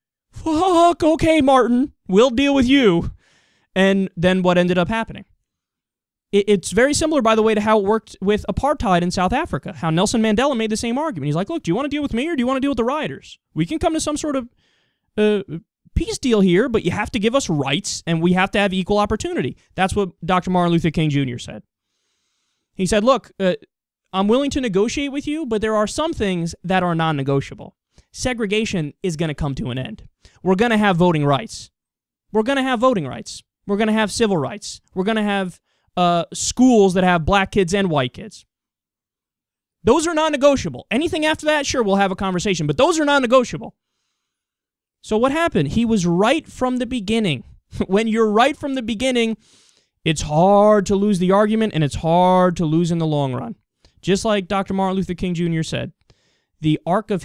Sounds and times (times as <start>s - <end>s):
Speech: 0.4s - 3.2s, 3.8s - 5.4s, 6.4s - 14.5s, 15.2s - 21.7s, 22.8s - 38.5s, 39.8s - 43.8s, 45.0s - 49.4s, 50.1s - 56.0s, 56.6s - 57.2s.